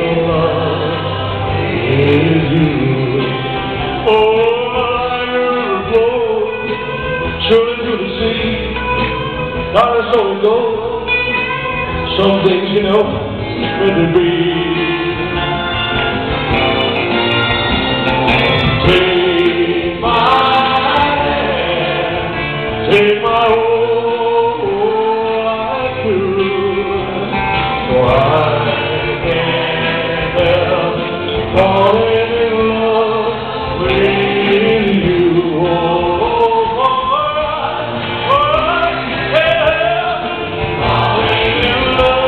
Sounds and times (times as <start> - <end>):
Male singing: 0.0 - 11.2, 12.1 - 15.6, 18.6 - 42.2
Music: 0.0 - 42.2.